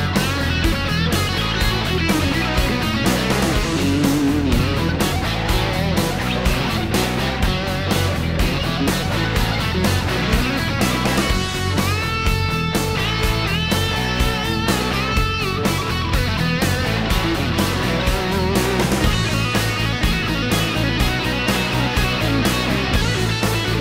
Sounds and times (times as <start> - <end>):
Electric guitar: 0.0 - 23.8
Rock and roll: 0.0 - 23.8
Strum: 0.0 - 23.8.